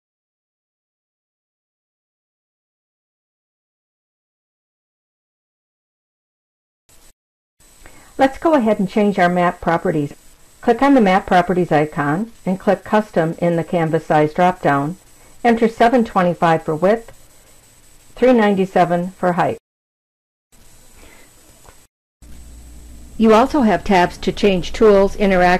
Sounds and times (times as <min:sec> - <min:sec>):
Speech: 0:08.2 - 0:17.2, 0:18.2 - 0:19.6, 0:23.2 - 0:25.5.